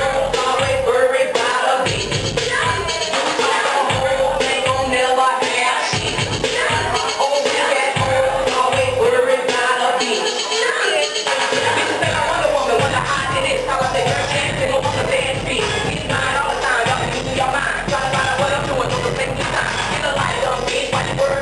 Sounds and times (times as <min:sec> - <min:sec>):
Music: 0:00.0 - 0:21.4
Singing: 0:00.0 - 0:21.4.